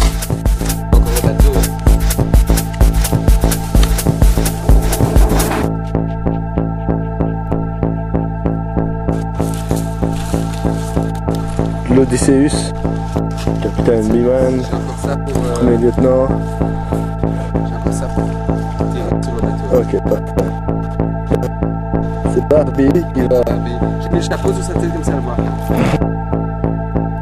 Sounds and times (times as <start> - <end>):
Music: 0.0 - 27.2
Speech: 0.9 - 1.7, 11.9 - 12.7, 13.6 - 16.3, 22.3 - 25.7.